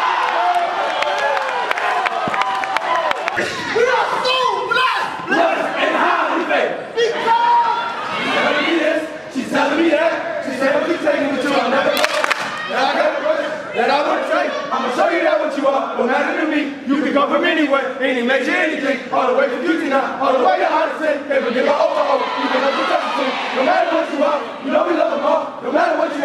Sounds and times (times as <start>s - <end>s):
Inside, public space: 0.0s - 26.2s
Speech: 3.7s - 26.2s.